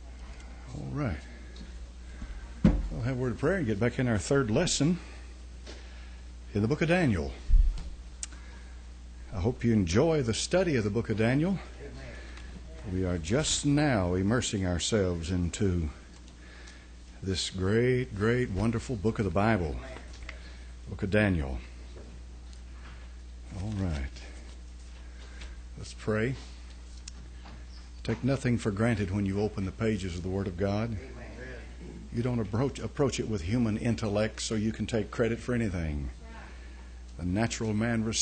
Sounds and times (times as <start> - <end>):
Speech: 0.1 - 1.4, 2.9 - 5.1, 6.5 - 7.4, 9.3 - 16.0, 17.2 - 21.7, 23.5 - 24.4, 25.8 - 26.5, 28.1 - 36.5, 37.2 - 38.2.